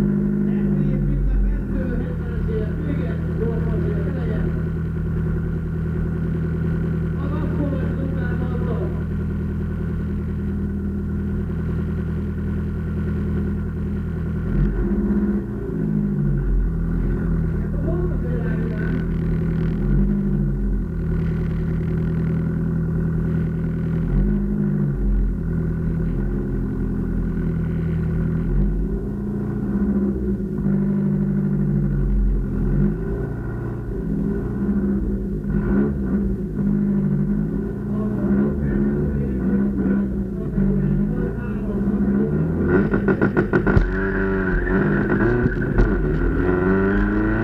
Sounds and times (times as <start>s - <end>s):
Car: 0.0s - 47.4s
Outside, urban or manmade: 0.0s - 47.4s.